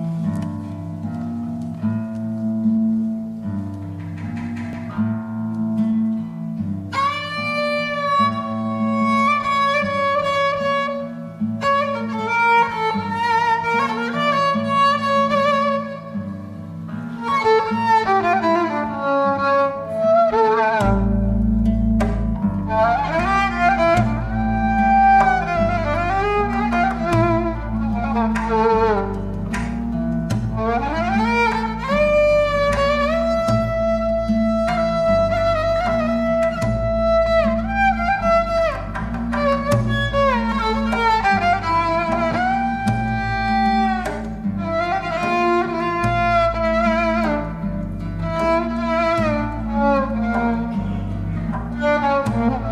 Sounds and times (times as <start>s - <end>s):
Bowed string instrument: 0.0s - 52.7s.